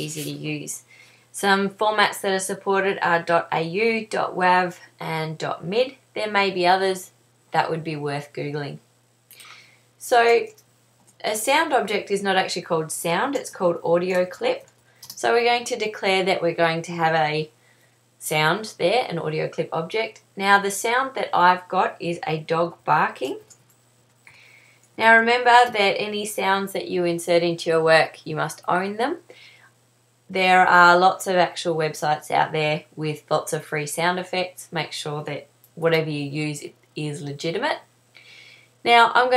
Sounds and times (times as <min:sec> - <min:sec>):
Speech: 0:00.0 - 0:00.8, 0:01.4 - 0:08.8, 0:10.0 - 0:10.6, 0:11.2 - 0:17.5, 0:18.2 - 0:23.5, 0:25.0 - 0:29.3, 0:30.3 - 0:37.9, 0:38.8 - 0:39.3.